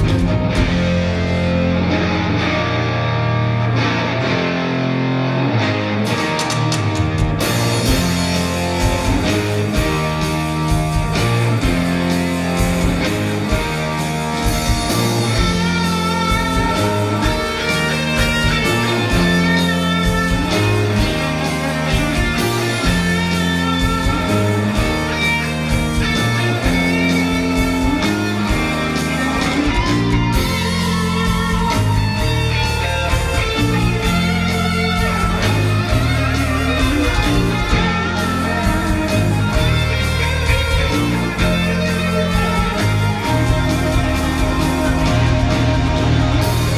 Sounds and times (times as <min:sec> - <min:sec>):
Music: 0:00.0 - 0:46.7.